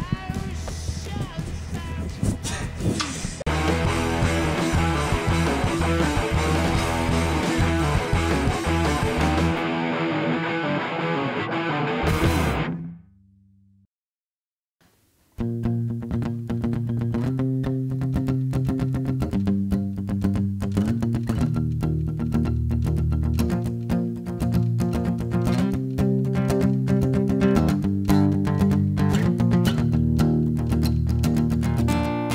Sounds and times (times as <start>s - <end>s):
Music: 0.0s - 13.1s, 15.3s - 32.3s.